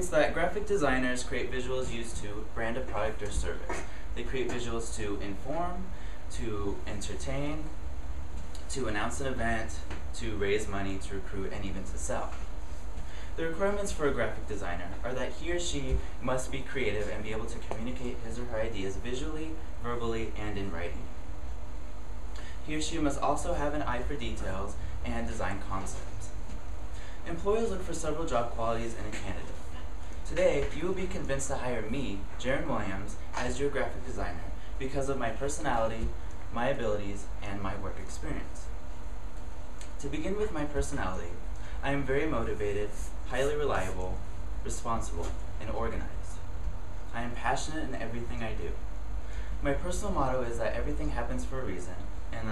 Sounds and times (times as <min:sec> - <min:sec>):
Male speech, man speaking: 0:00.0 - 0:07.7, 0:08.7 - 0:12.4, 0:13.4 - 0:21.1, 0:22.6 - 0:26.3, 0:27.2 - 0:29.6, 0:30.3 - 0:38.7, 0:40.0 - 0:46.4, 0:47.1 - 0:48.8, 0:49.6 - 0:52.5
Narration, monologue: 0:00.0 - 0:52.5.